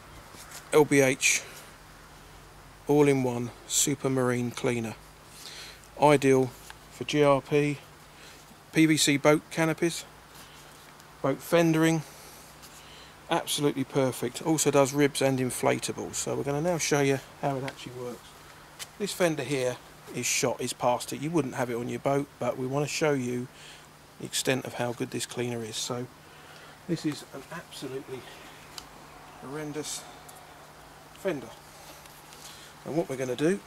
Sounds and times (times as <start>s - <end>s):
Speech: 0.7s - 1.6s, 2.9s - 5.0s, 6.0s - 7.8s, 8.7s - 10.1s, 11.2s - 12.1s, 13.3s - 18.3s, 19.0s - 23.5s, 24.2s - 26.1s, 26.9s - 28.4s, 29.4s - 30.1s, 31.2s - 31.6s, 32.8s - 33.6s.